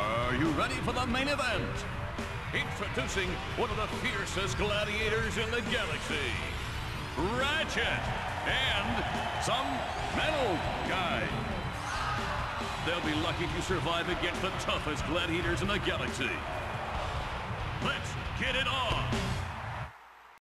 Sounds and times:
Speech: 2.6 - 6.5, 7.2 - 11.4, 12.8 - 16.4, 17.8 - 19.2.

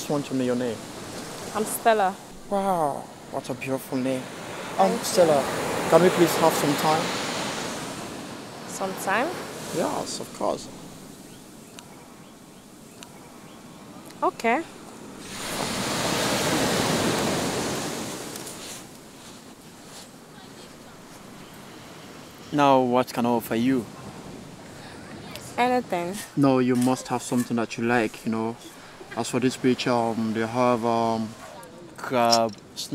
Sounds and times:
Speech: 14.2 - 14.6, 25.3 - 28.6, 32.0 - 32.9.

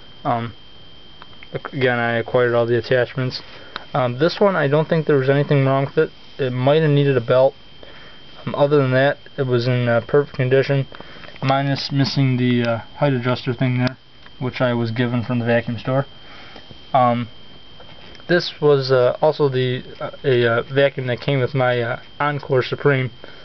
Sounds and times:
Speech: 0.3 - 0.6, 1.5 - 7.6, 8.4 - 16.1, 17.0 - 17.3, 18.3 - 23.2.

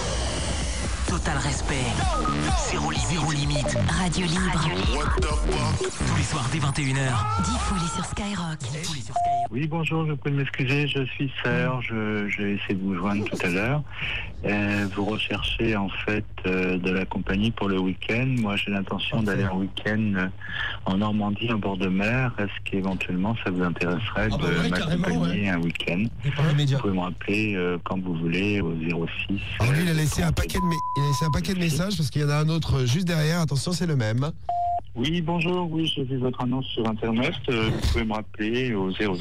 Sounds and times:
Radio: 1.1 - 7.2, 10.6 - 15.4, 22.4 - 27.6, 28.6 - 32.1
Speech: 2.8 - 13.8, 14.4 - 34.3, 35.0 - 39.2.

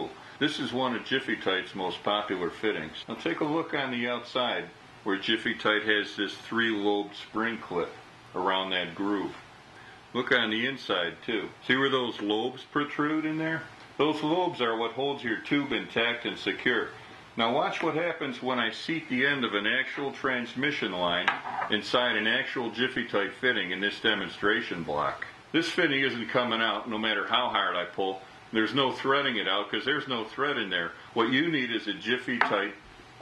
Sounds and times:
Speech: 0.0 - 9.4, 10.1 - 32.8.

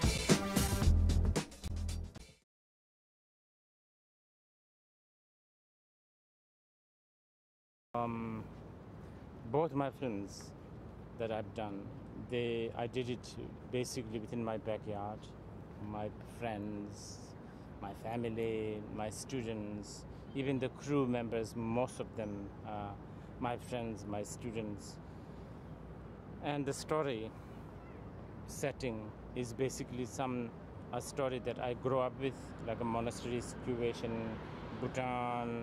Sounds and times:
Music: 0.0 - 2.4
Speech: 8.0 - 8.5, 9.5 - 10.6, 11.2 - 25.0, 26.4 - 27.4, 28.5 - 35.6.

